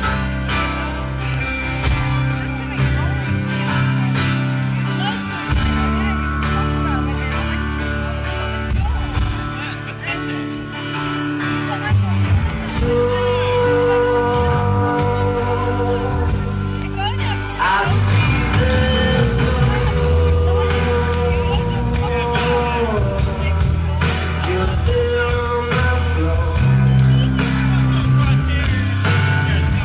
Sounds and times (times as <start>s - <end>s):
Music: 0.0s - 29.8s
Speech: 0.0s - 29.8s.